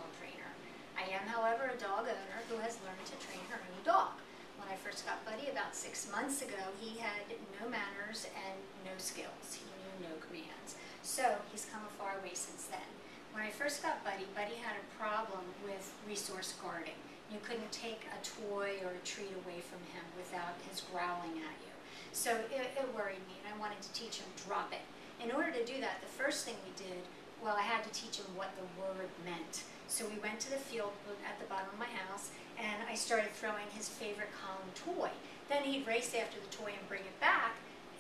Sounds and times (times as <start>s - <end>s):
Speech: 0.0s - 38.0s.